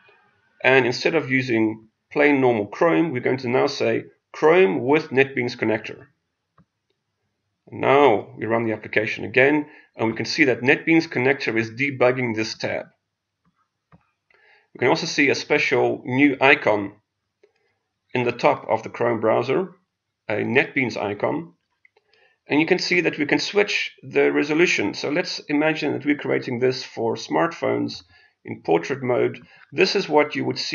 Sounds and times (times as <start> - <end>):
Inside, small room: 0.0 - 7.0, 7.7 - 12.9, 13.9 - 30.7
Speech: 0.6 - 6.0, 7.8 - 12.8, 14.8 - 16.9, 18.2 - 19.7, 20.3 - 21.5, 22.5 - 30.7.